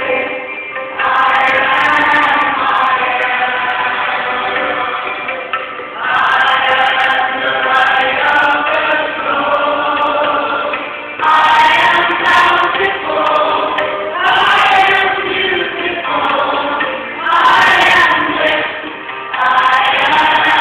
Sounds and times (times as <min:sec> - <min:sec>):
Mantra: 0:00.0 - 0:05.3, 0:06.0 - 0:18.8, 0:19.4 - 0:20.6.